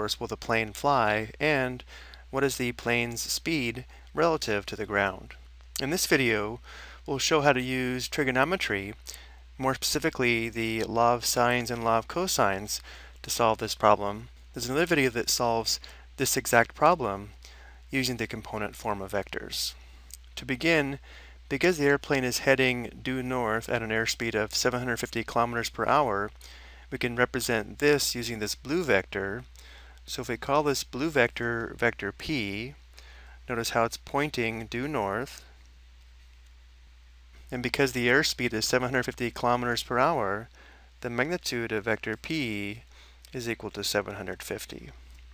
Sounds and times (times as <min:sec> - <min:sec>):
Speech: 0:00.0 - 0:09.0, 0:09.6 - 0:19.8, 0:20.4 - 0:29.5, 0:30.1 - 0:32.8, 0:33.5 - 0:35.5, 0:37.5 - 0:45.0.